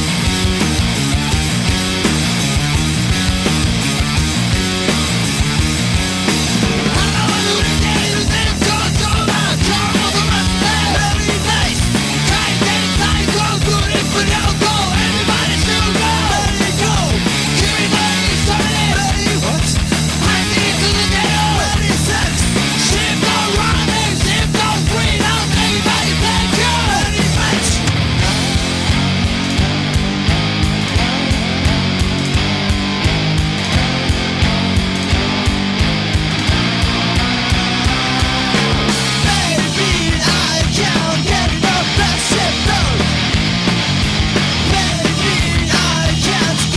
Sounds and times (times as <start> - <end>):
Music: 0.0 - 46.7.